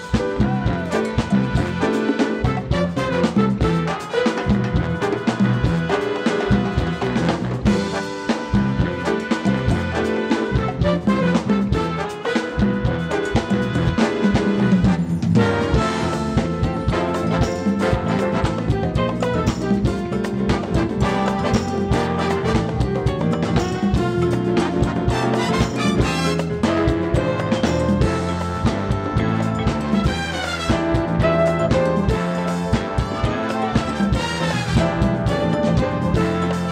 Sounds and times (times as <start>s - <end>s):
Music: 0.0s - 36.7s.